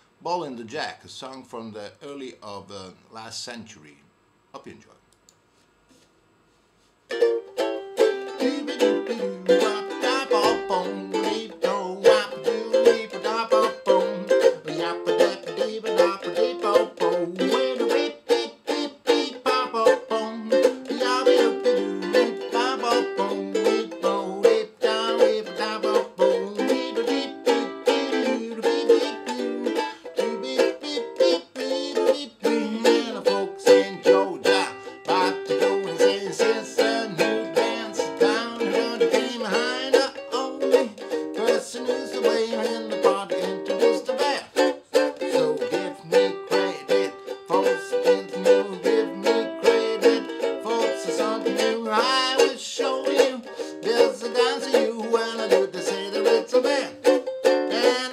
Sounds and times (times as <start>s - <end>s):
Inside, small room: 0.0s - 58.1s
Ukulele: 7.1s - 58.1s.